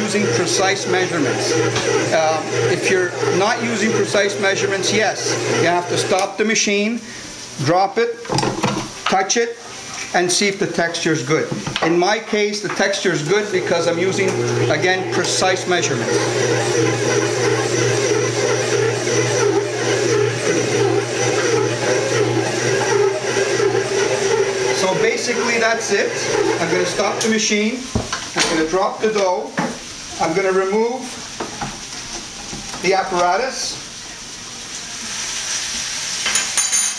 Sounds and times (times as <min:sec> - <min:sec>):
Blender: 0:00.0 - 0:07.1, 0:13.2 - 0:31.5.